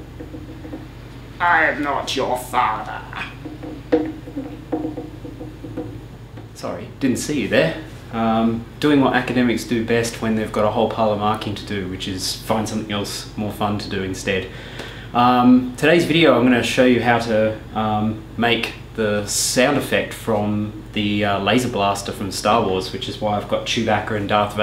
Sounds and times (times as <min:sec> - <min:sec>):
Speech: 0:01.4 - 0:03.4, 0:06.6 - 0:14.5, 0:15.2 - 0:24.6.